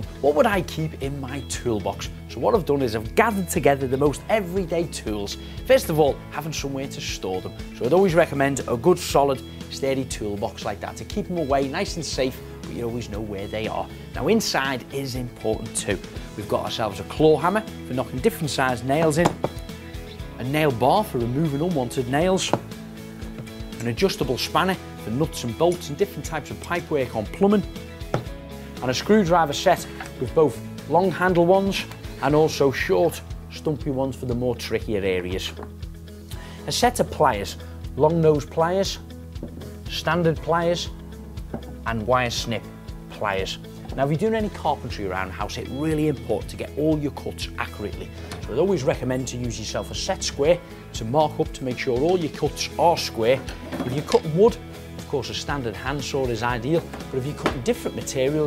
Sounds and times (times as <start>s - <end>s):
Speech: 0.0s - 19.4s, 20.4s - 22.6s, 23.8s - 27.7s, 28.8s - 35.6s, 36.7s - 39.0s, 39.9s - 40.9s, 41.8s - 58.4s
Music: 0.0s - 58.4s.